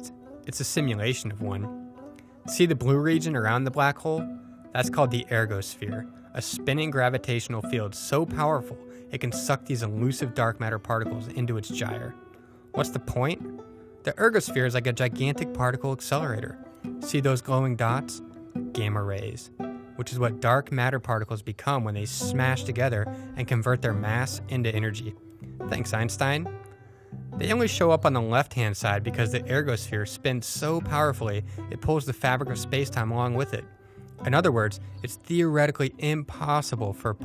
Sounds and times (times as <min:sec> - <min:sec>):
Speech: 0:00.0 - 0:01.7, 0:02.5 - 0:04.2, 0:04.8 - 0:12.2, 0:12.8 - 0:13.4, 0:14.0 - 0:18.2, 0:18.8 - 0:26.5, 0:27.4 - 0:37.2
Music: 0:00.0 - 0:37.2.